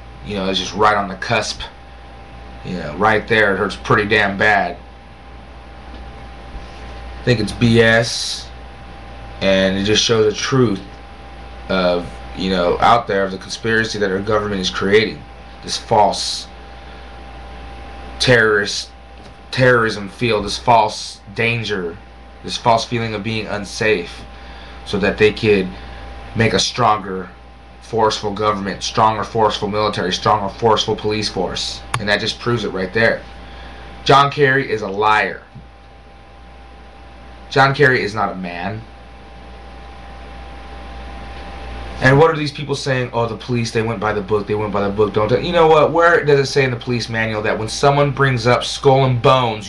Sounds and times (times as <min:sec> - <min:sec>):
Narration, monologue: 0:00.0 - 0:49.6
Male speech, man speaking: 0:00.2 - 0:01.8, 0:02.6 - 0:04.8, 0:07.2 - 0:08.6, 0:09.4 - 0:10.9, 0:11.7 - 0:16.5, 0:18.2 - 0:24.3, 0:24.9 - 0:25.8, 0:26.4 - 0:33.2, 0:34.0 - 0:35.6, 0:37.5 - 0:38.9, 0:42.0 - 0:49.6.